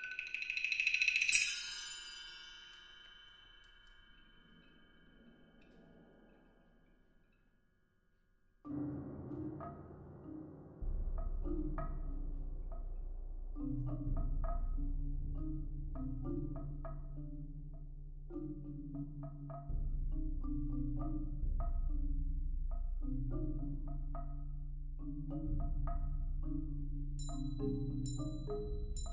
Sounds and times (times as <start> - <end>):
Percussion: 0.0 - 7.6, 8.7 - 29.1.